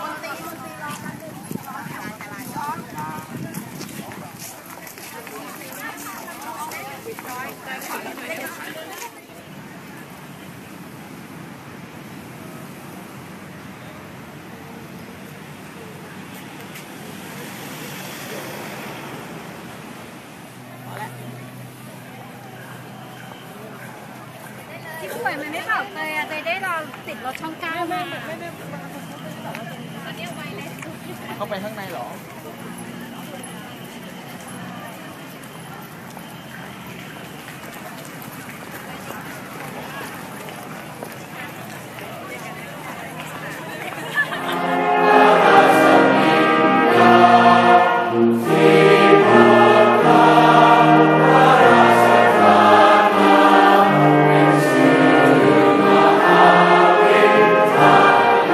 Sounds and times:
Speech: 0.0 - 10.8, 13.9 - 18.7, 20.6 - 44.7.

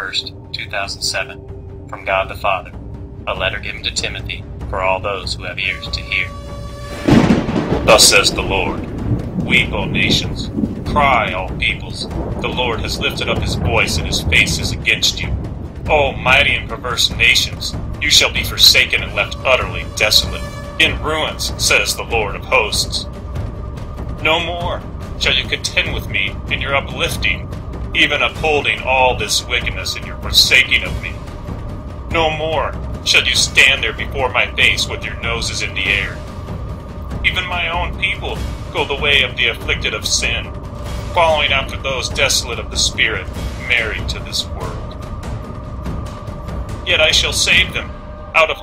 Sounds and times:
Speech: 0.0 - 2.7, 3.3 - 6.4, 7.8 - 23.1, 24.2 - 31.2, 32.1 - 36.2, 37.3 - 40.5, 41.1 - 45.0, 46.9 - 48.6
Music: 0.0 - 48.6.

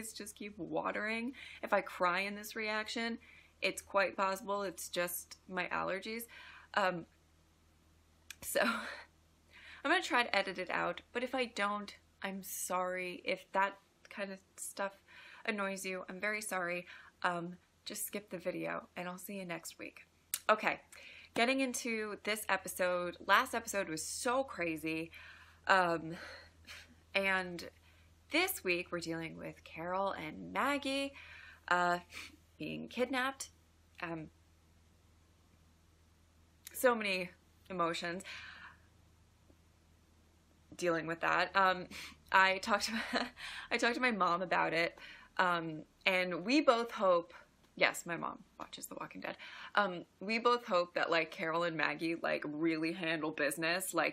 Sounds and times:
Speech: 0.0 - 7.1, 8.3 - 9.0, 9.9 - 25.1, 25.7 - 26.2, 27.2 - 27.7, 28.3 - 34.3, 36.7 - 38.2, 40.8 - 54.1.

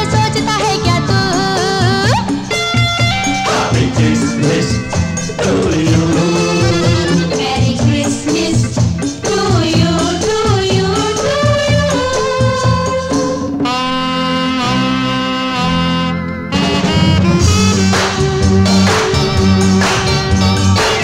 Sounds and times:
Music: 0.0 - 21.0.

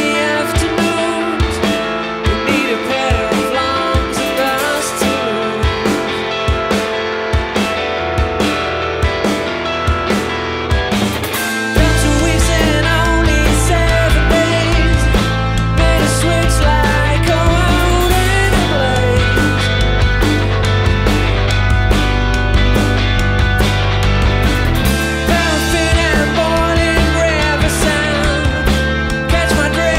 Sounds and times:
Guitar: 0.0 - 29.9
Independent music: 0.0 - 29.9.

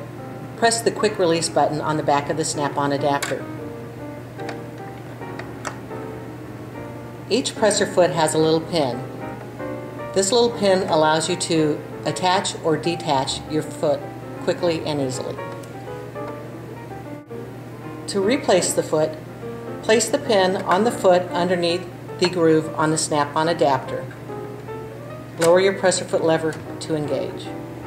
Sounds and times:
Music: 0.0 - 27.8
Speech: 0.6 - 3.4, 7.3 - 9.1, 10.2 - 15.4, 18.1 - 19.2, 19.9 - 24.1, 25.4 - 27.5.

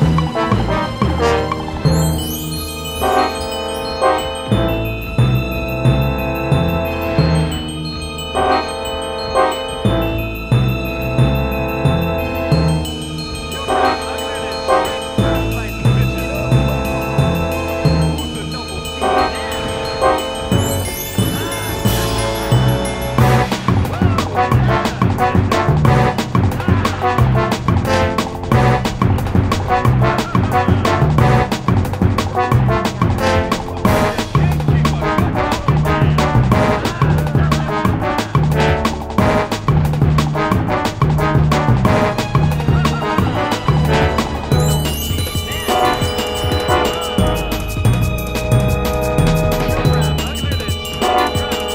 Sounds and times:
Music: 0.0 - 51.7
Speech: 13.5 - 17.3, 18.1 - 20.2, 23.8 - 27.6, 29.8 - 31.4, 33.6 - 38.6, 42.6 - 44.0, 49.6 - 51.7.

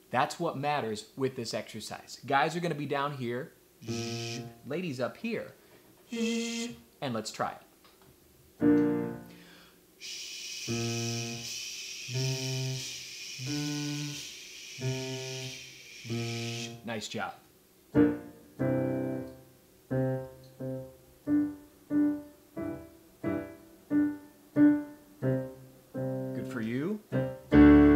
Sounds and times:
Speech: 0.1 - 3.6, 4.7 - 5.6, 7.0 - 7.7, 16.8 - 17.4, 26.4 - 27.0
Piano: 8.6 - 9.5, 17.9 - 27.9.

